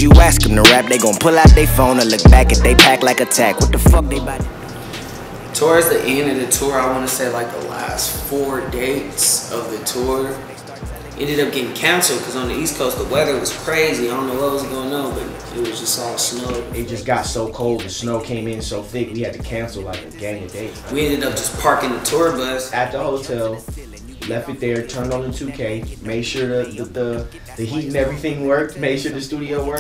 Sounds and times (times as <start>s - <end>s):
Speech: 0.0s - 4.4s, 5.6s - 29.8s
Music: 0.0s - 29.8s.